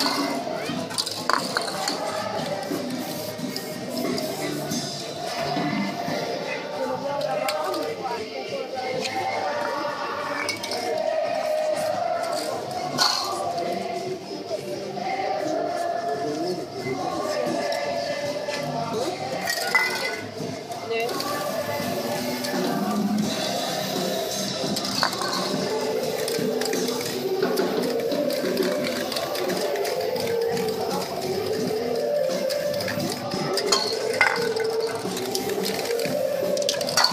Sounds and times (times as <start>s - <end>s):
Music: 0.0s - 37.1s
Speech: 4.0s - 20.2s, 20.8s - 23.0s.